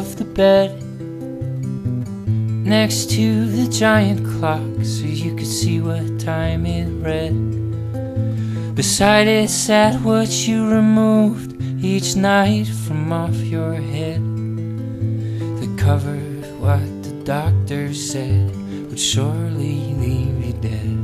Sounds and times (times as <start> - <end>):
Music: 0.0 - 21.0.